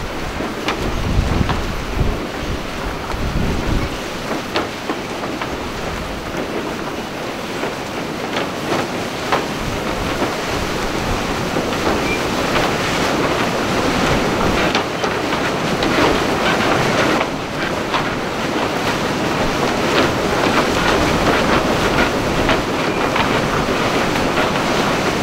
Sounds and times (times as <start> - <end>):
Rustling leaves: 0.0 - 25.2.